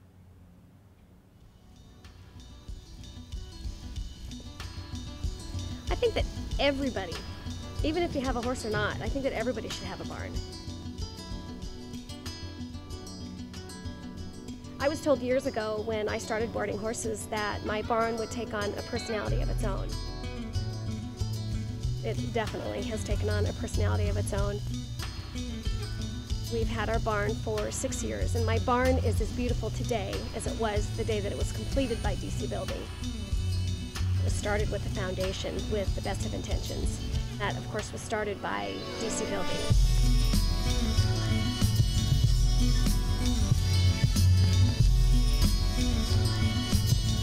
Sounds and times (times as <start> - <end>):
Music: 1.4 - 47.2
Speech: 5.9 - 7.2, 7.8 - 10.4, 14.8 - 20.0, 22.0 - 24.6, 26.5 - 32.9, 34.2 - 39.7.